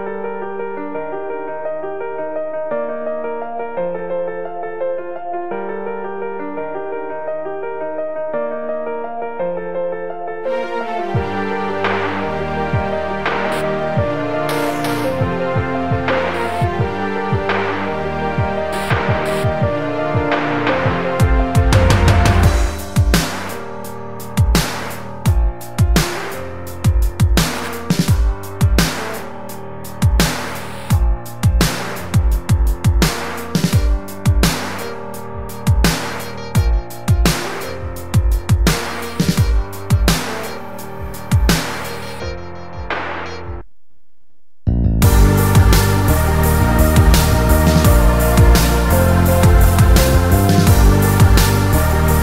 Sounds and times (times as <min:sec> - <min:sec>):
Independent music: 0:00.0 - 0:43.7, 0:44.7 - 0:52.2.